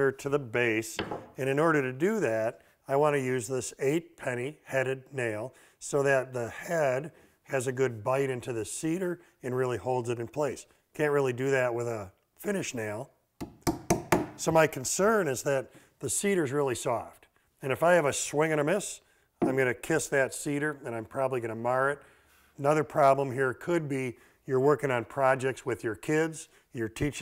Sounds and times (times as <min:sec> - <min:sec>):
Speech: 0:00.0 - 0:13.2, 0:14.4 - 0:22.0, 0:22.6 - 0:27.2.